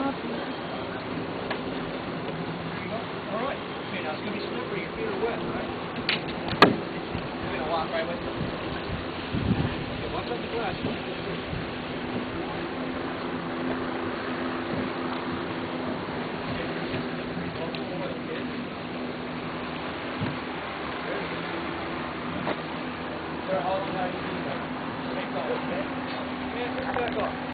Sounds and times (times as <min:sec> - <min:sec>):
Speech: 0:02.8 - 0:05.8, 0:07.4 - 0:08.3, 0:09.7 - 0:11.4, 0:17.4 - 0:18.5, 0:23.5 - 0:27.4.